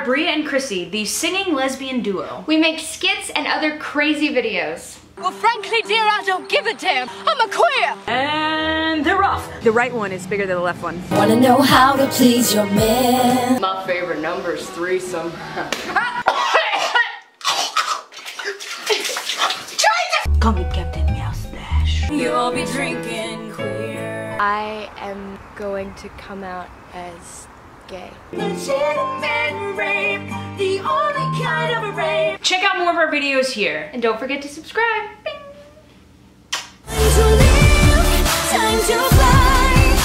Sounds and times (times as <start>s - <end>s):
Speech: 0.0s - 11.0s, 13.6s - 15.4s, 32.4s - 35.2s
Music: 5.2s - 10.3s, 11.1s - 15.4s, 20.3s - 24.5s, 28.3s - 32.4s, 36.9s - 40.0s.